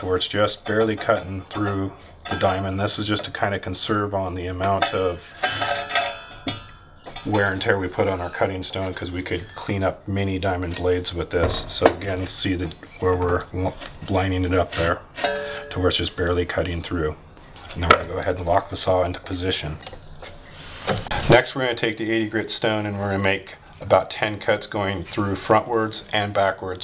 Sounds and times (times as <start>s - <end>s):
Speech: 0.0s - 5.2s, 7.2s - 15.0s, 15.7s - 19.8s, 21.1s - 26.8s.